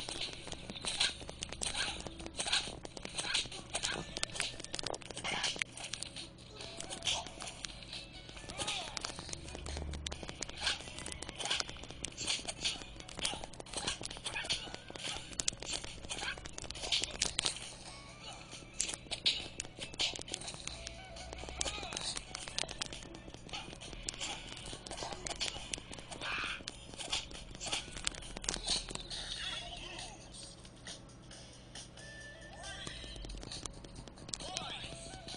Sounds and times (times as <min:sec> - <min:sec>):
Music: 0:00.0 - 0:35.3
Speech: 0:08.5 - 0:09.0, 0:29.3 - 0:30.4, 0:34.4 - 0:35.2.